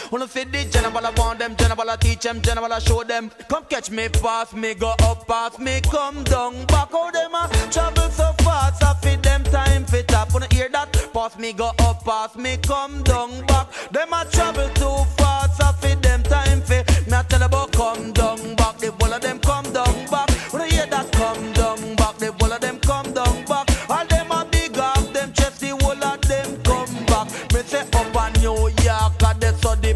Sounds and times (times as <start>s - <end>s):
Music: 0.0s - 29.9s.